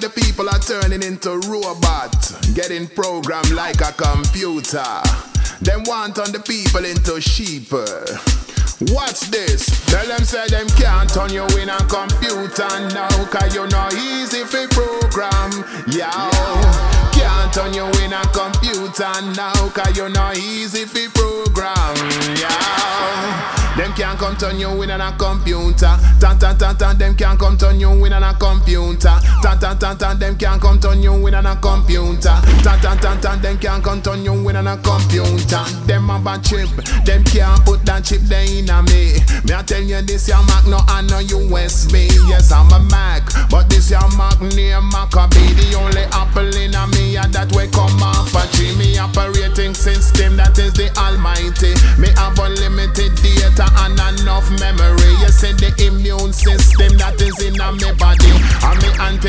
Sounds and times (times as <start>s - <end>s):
Reggae: 0.0s - 59.2s.